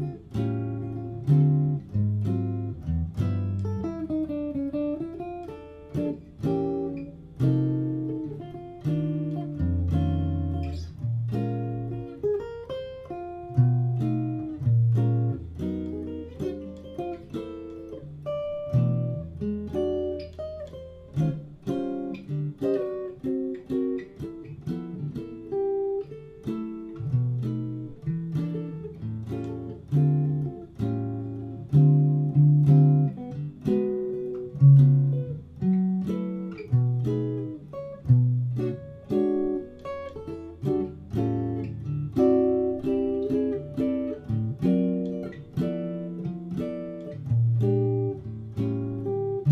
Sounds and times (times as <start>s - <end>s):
Acoustic guitar: 0.0s - 49.5s
Inside, small room: 0.0s - 49.5s.